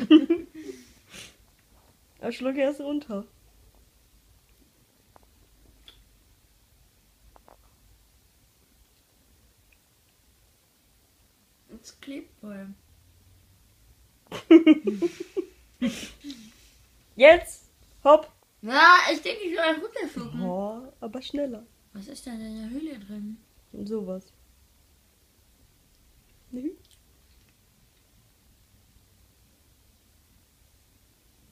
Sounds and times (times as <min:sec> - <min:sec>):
Inside, small room: 0:00.0 - 0:31.5
Speech: 0:17.2 - 0:21.6.